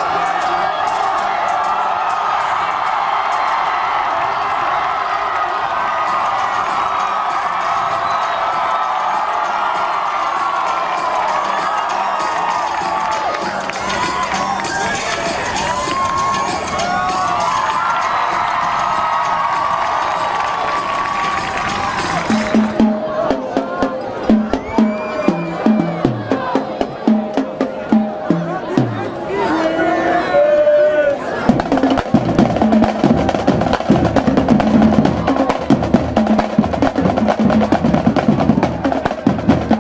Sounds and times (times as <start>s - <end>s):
Music: 0.0s - 30.4s, 31.0s - 39.8s
Inside, public space: 0.0s - 39.8s.